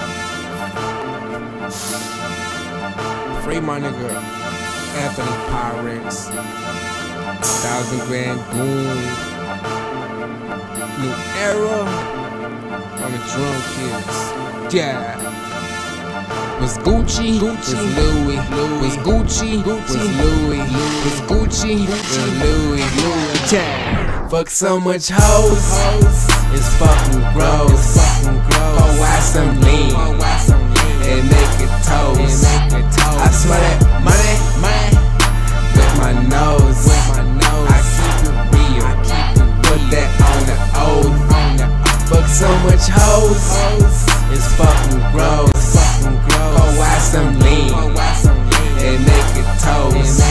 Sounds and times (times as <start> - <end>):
Soundtrack music: 0.0 - 24.5, 25.2 - 50.3.